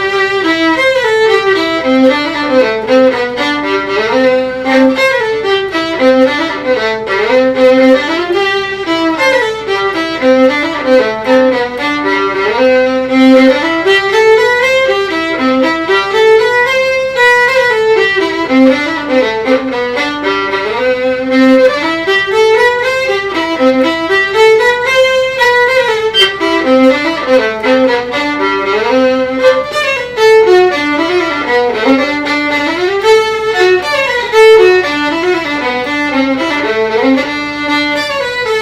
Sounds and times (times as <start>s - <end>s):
Violin, fiddle: 0.0s - 38.6s.